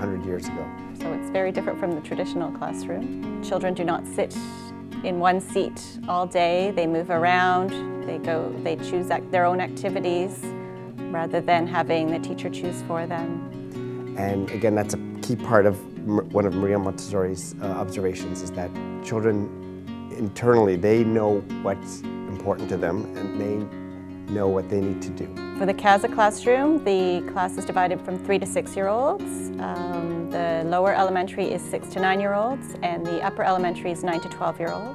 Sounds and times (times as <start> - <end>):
Music: 0.0 - 34.9
Speech: 14.2 - 19.5, 20.1 - 23.7, 24.3 - 34.9.